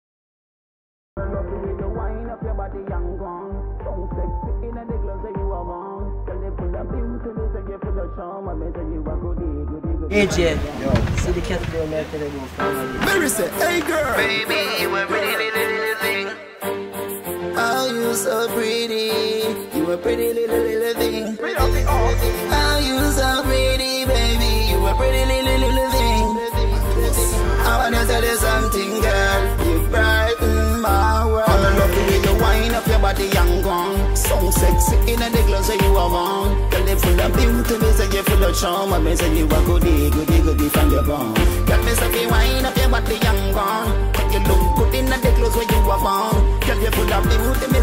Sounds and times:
Dance music: 0:01.2 - 0:10.6, 0:12.6 - 0:47.8.

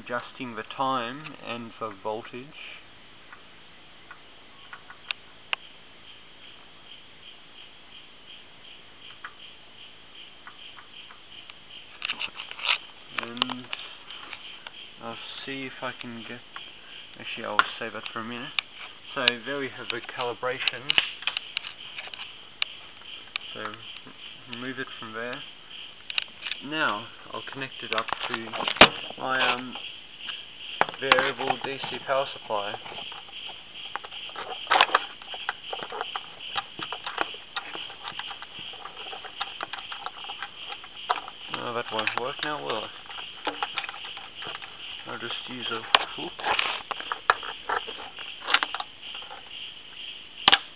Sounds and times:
Speech: 0:00.0 - 0:02.8, 0:13.1 - 0:13.8, 0:15.0 - 0:16.5, 0:17.2 - 0:21.0, 0:23.6 - 0:23.9, 0:24.5 - 0:25.5, 0:26.6 - 0:29.8, 0:30.9 - 0:32.9, 0:41.5 - 0:43.0, 0:45.1 - 0:46.4
Inside, small room: 0:00.0 - 0:50.7.

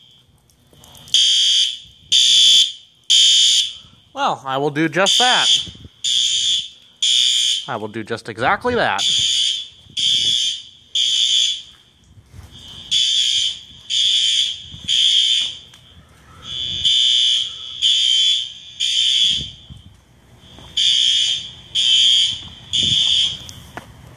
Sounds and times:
Fire alarm: 0:00.0 - 0:23.7
Speech: 0:04.2 - 0:05.6, 0:07.7 - 0:09.2.

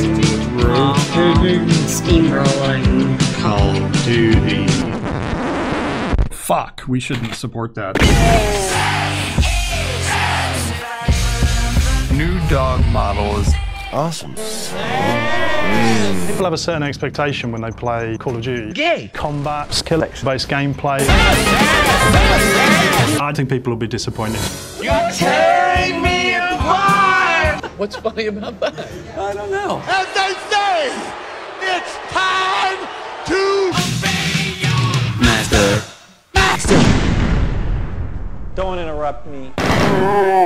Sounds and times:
Music: 0:00.0 - 0:06.1, 0:08.0 - 0:18.8, 0:20.7 - 0:23.2, 0:24.0 - 0:27.6, 0:33.7 - 0:36.3
Speech: 0:01.0 - 0:04.8, 0:06.4 - 0:08.7, 0:12.1 - 0:21.1, 0:23.2 - 0:31.0, 0:35.2 - 0:36.8, 0:38.6 - 0:39.6.

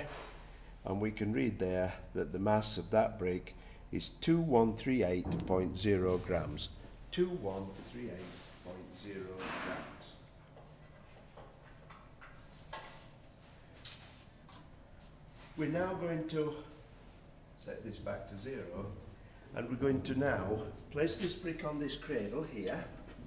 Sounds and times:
Speech: 0:00.8 - 0:10.2, 0:15.6 - 0:16.8, 0:17.6 - 0:23.1.

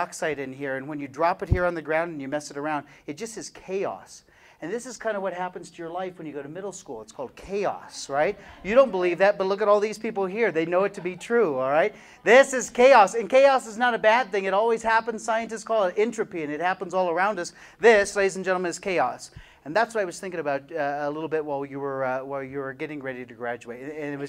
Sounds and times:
Speech: 0:00.0 - 0:24.2.

